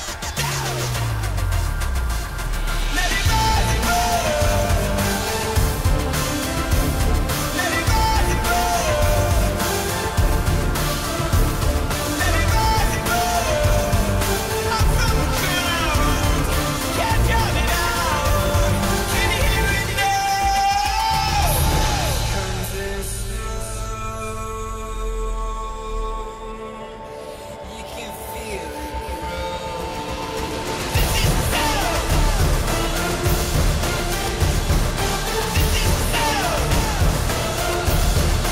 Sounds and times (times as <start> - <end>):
Music: 0.0 - 38.5.